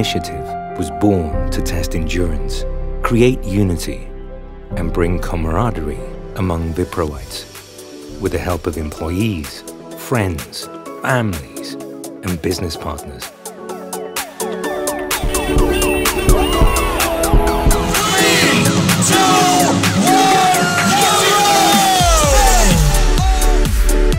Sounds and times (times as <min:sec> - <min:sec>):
Speech: 0:00.0 - 0:04.1, 0:04.7 - 0:07.5, 0:08.1 - 0:13.3
Music: 0:00.0 - 0:24.1.